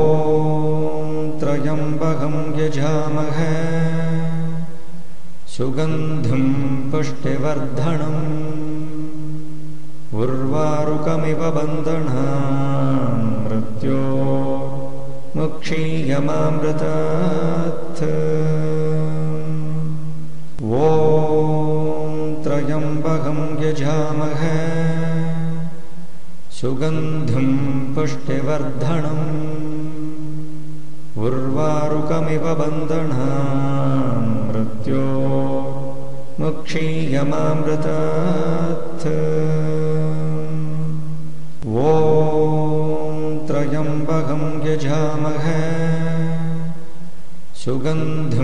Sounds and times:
Mantra: 0.0s - 4.8s, 5.4s - 48.4s.

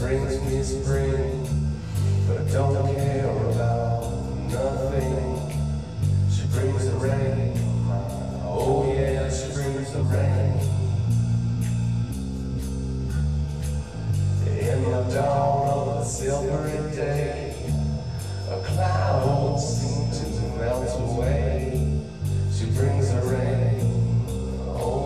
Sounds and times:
Music: 0.0s - 25.0s.

